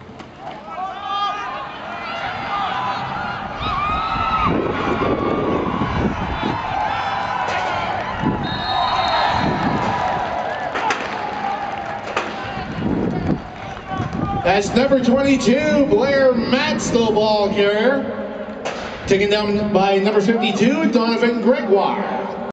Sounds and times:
Run: 2.2 - 15.0
Speech: 13.9 - 18.1, 19.1 - 22.3.

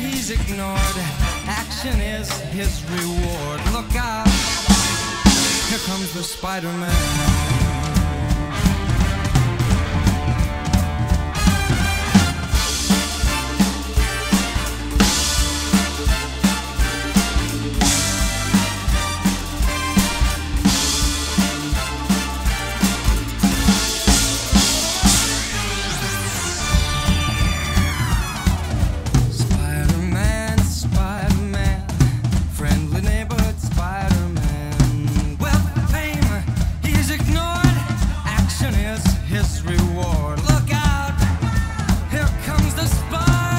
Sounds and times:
Drum: 0.0 - 43.5
Drum kit: 0.0 - 43.5.

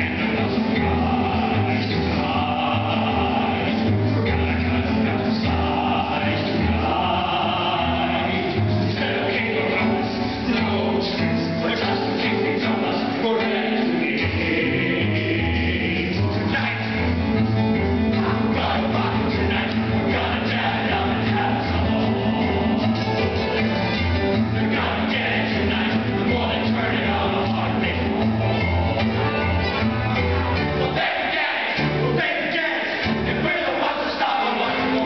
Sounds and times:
Inside, large room or hall: 0.0 - 35.0
Music: 0.0 - 35.0.

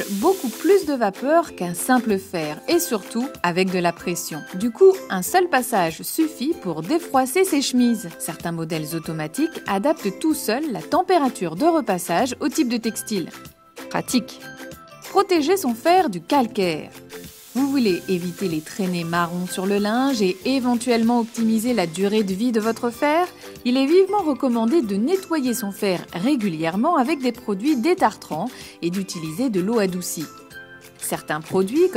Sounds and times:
Speech: 0.0 - 13.3, 13.9 - 14.4, 15.1 - 16.9, 17.6 - 30.3, 31.0 - 31.9
Music: 0.0 - 31.9.

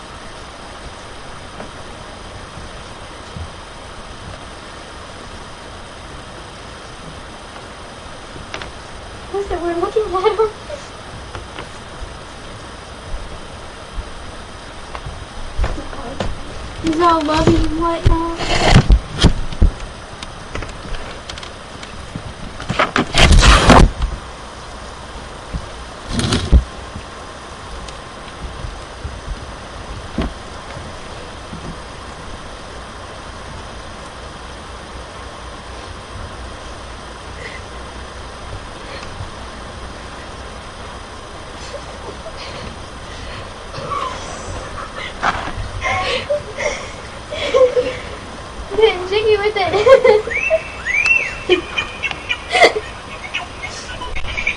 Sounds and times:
Speech: 9.3 - 10.8, 15.7 - 18.4, 48.7 - 49.8.

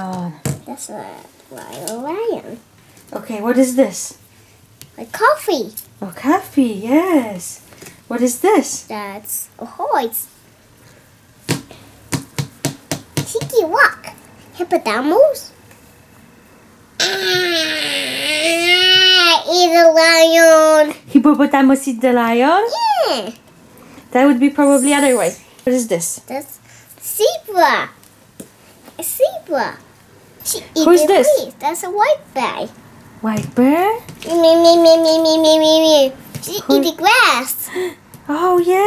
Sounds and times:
Inside, small room: 0.0 - 38.8
Child speech, kid speaking: 0.6 - 3.4, 5.0 - 5.8, 8.8 - 10.3, 13.3 - 15.6, 17.6 - 21.0, 22.6 - 23.4, 26.2 - 28.0, 29.0 - 29.8, 30.4 - 32.8, 34.2 - 37.7.

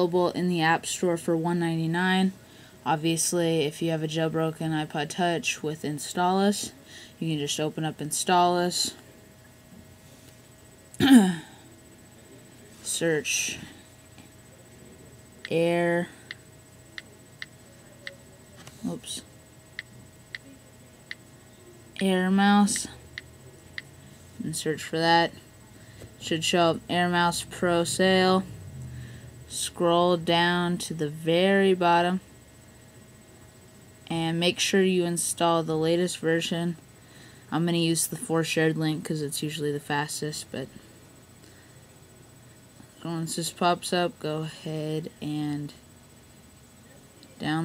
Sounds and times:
Speech: 0.0 - 9.0, 12.4 - 13.8, 15.0 - 16.2, 17.8 - 19.3, 21.8 - 23.0, 24.4 - 25.4, 26.2 - 28.5, 29.5 - 32.3, 34.1 - 36.8, 37.5 - 40.8, 43.0 - 45.8, 46.8 - 47.6.

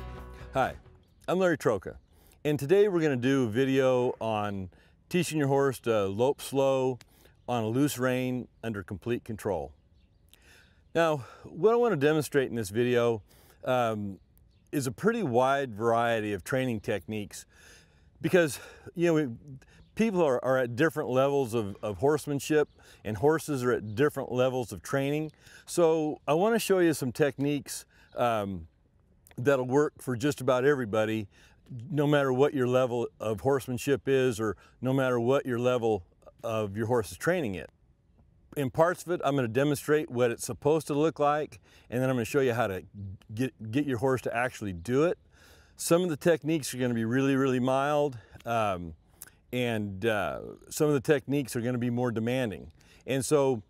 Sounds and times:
Speech: 0.6 - 9.8, 11.0 - 14.2, 14.8 - 17.5, 18.2 - 28.7, 29.3 - 37.7, 38.6 - 45.2, 45.8 - 53.6.

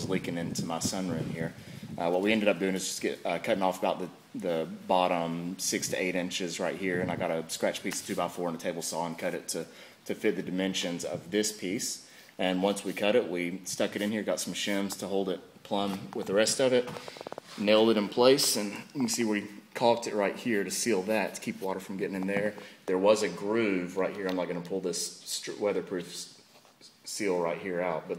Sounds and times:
Speech: 0.0 - 28.1.

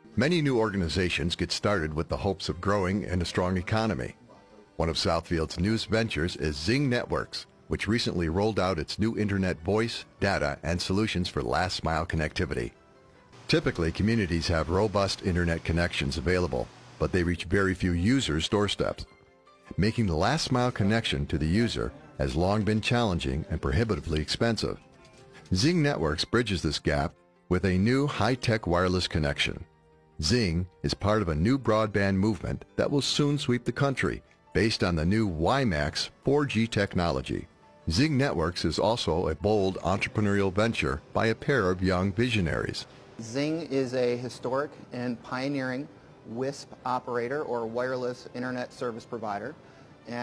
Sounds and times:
Music: 0.0 - 50.2
Speech: 0.2 - 4.2, 4.8 - 12.7, 13.5 - 19.1, 19.8 - 24.8, 25.5 - 29.6, 30.2 - 50.2.

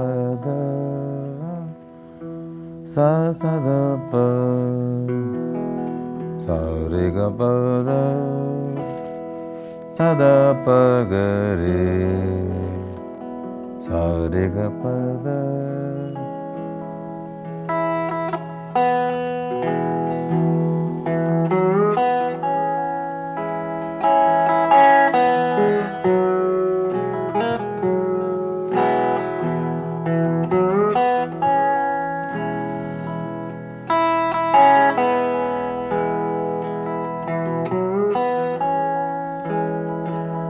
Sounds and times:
Plucked string instrument: 0.0 - 40.4.

